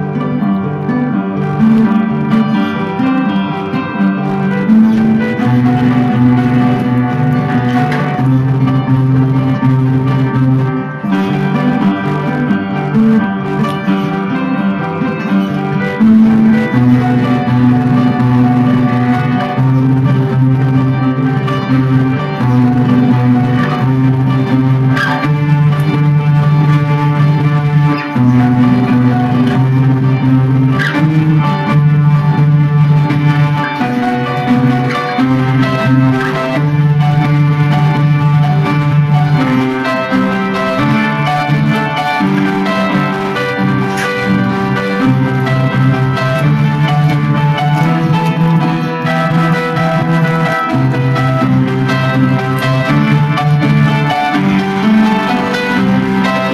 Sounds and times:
Acoustic guitar: 0.0 - 56.5
Strum: 0.0 - 56.5.

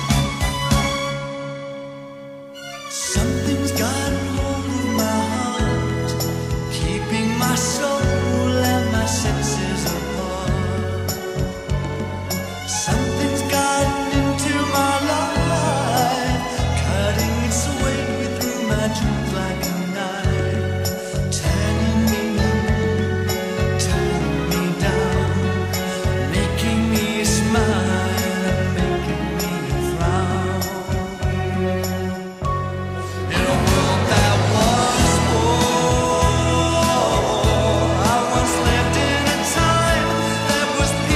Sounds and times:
Soul music: 0.0 - 41.1.

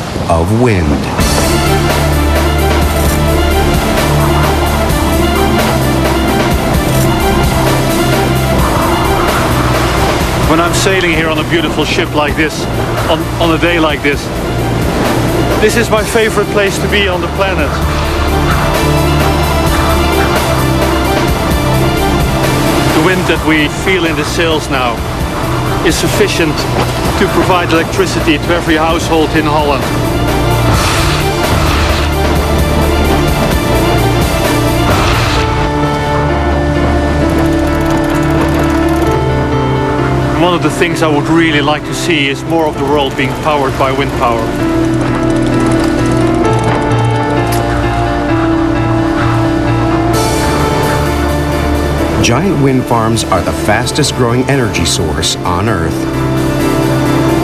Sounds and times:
Music: 0.0 - 57.4
Speech: 0.3 - 1.2, 10.5 - 14.3, 15.6 - 17.8, 27.2 - 29.8, 40.4 - 44.4, 52.2 - 56.0.

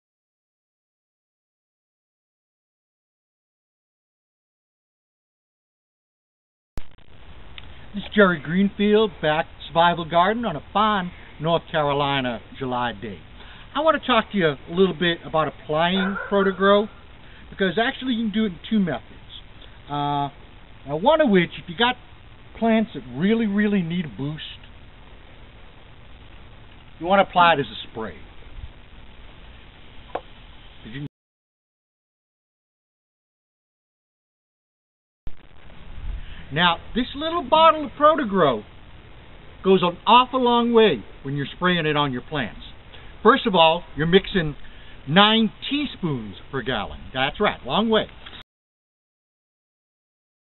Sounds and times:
Speech: 7.9 - 24.7, 27.0 - 28.3, 30.8 - 31.1, 36.5 - 38.7, 39.6 - 48.2.

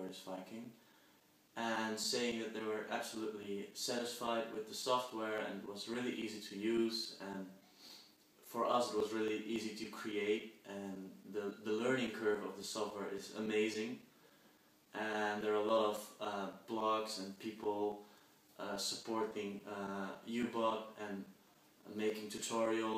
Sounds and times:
Speech: 0.0 - 0.8, 1.6 - 7.6, 8.4 - 14.1, 15.0 - 18.0, 18.6 - 22.9.

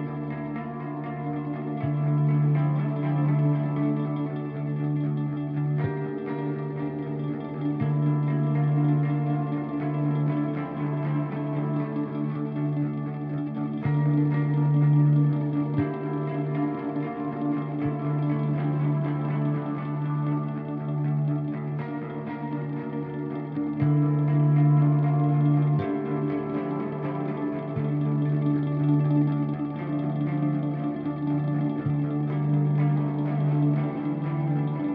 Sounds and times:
Music: 0.0 - 34.9.

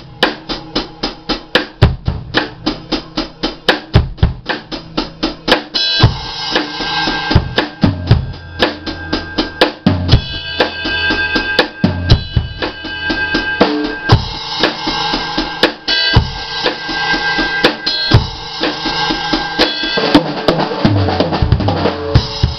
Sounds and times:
Drum kit: 0.0 - 22.5.

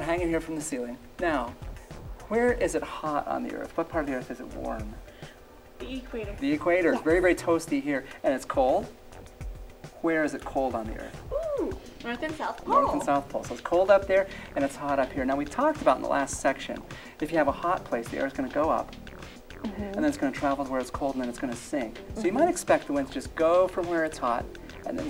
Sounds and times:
Music: 0.0 - 25.1
Speech: 5.9 - 8.9, 19.7 - 25.1.

